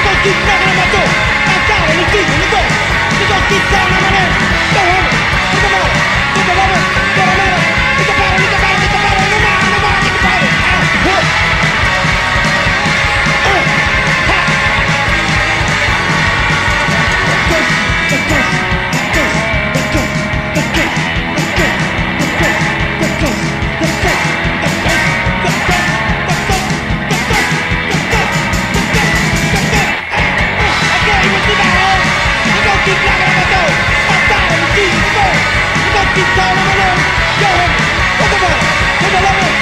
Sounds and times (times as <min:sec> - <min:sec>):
Music: 0:00.0 - 0:39.6.